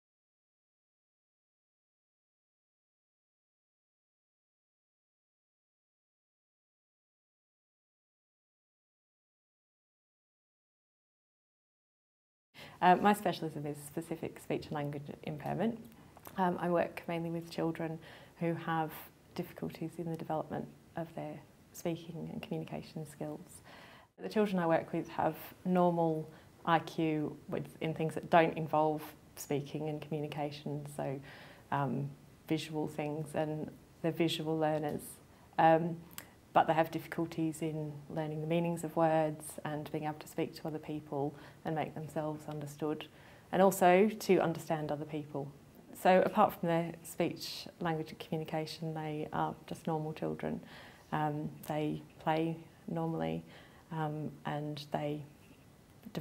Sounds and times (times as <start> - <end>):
Narration, monologue: 12.6 - 56.2
Female speech, woman speaking: 12.8 - 23.6, 24.2 - 55.3.